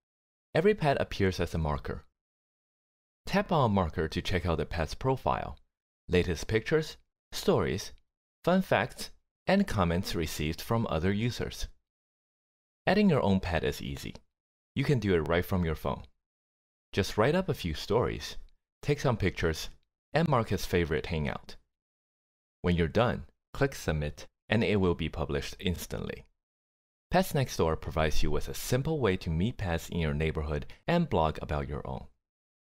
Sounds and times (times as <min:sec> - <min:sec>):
Speech: 0:00.6 - 0:02.1, 0:03.3 - 0:11.8, 0:12.9 - 0:14.2, 0:14.8 - 0:16.1, 0:17.0 - 0:21.6, 0:22.6 - 0:26.3, 0:27.1 - 0:32.2.